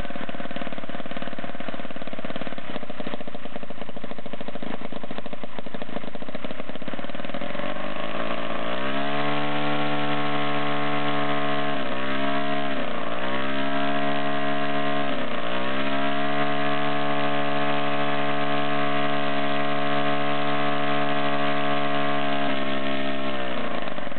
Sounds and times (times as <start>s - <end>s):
Medium engine (mid frequency): 0.0s - 24.1s
Accelerating, revving, vroom: 7.5s - 23.7s.